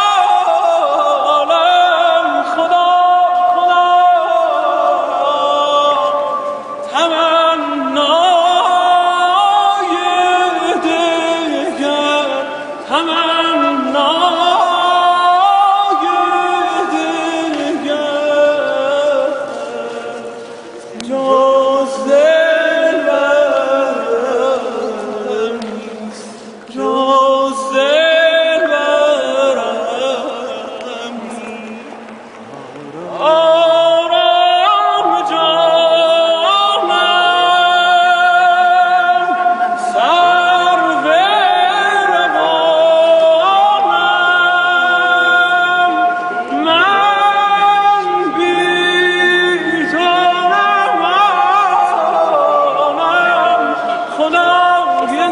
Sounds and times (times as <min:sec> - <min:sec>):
Male singing: 0:00.0 - 0:32.1, 0:32.9 - 0:55.3.